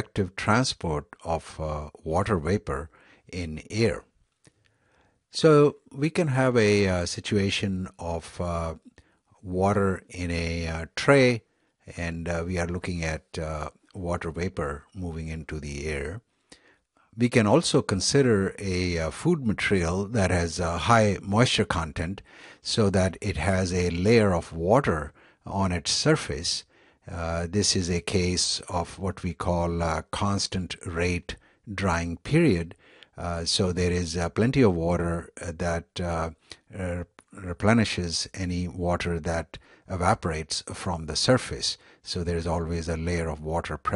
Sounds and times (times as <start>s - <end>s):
Speech: 0.0s - 4.1s, 5.3s - 16.3s, 17.2s - 43.9s.